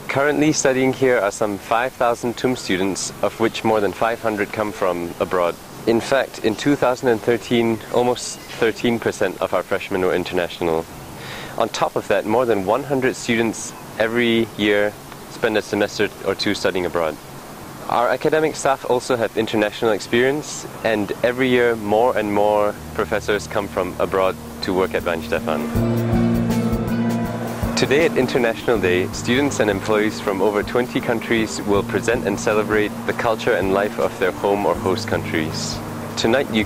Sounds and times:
Speech: 0.0 - 10.9, 11.6 - 17.2, 17.8 - 25.6, 27.8 - 36.6
Outside, urban or manmade: 0.0 - 36.6.

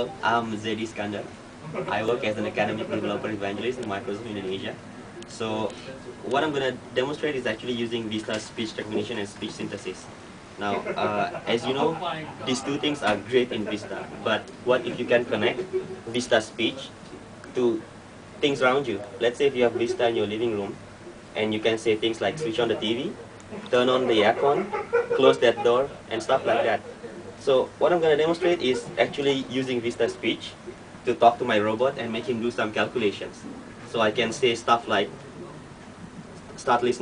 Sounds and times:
Male speech, man speaking: 0.0 - 20.8, 21.4 - 35.6, 36.6 - 37.0
Narration, monologue: 0.0 - 37.0.

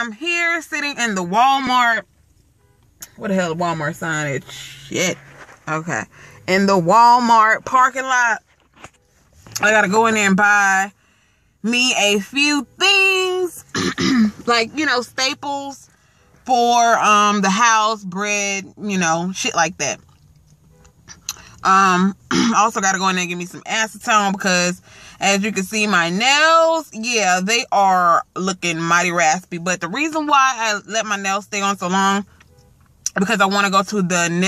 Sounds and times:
Speech: 0.0 - 2.0, 3.2 - 8.4, 9.6 - 10.9, 11.7 - 13.7, 14.4 - 15.8, 16.5 - 20.0, 21.6 - 32.2, 33.1 - 34.4.

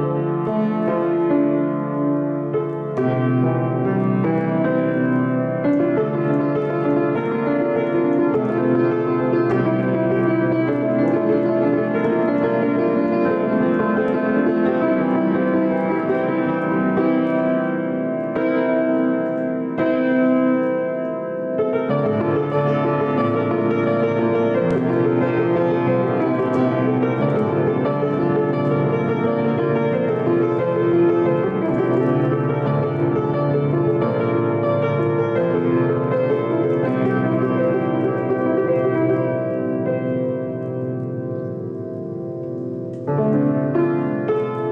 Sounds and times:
Music: 0.0 - 44.7.

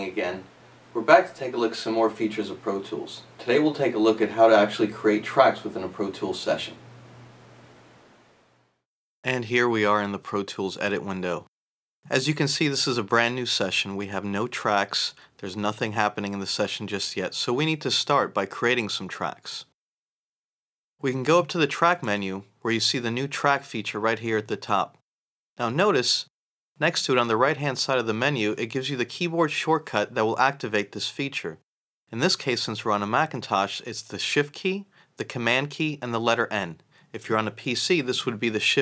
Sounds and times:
Speech: 0.0 - 6.8, 9.2 - 11.5, 12.1 - 19.7, 21.0 - 25.0, 25.6 - 38.8.

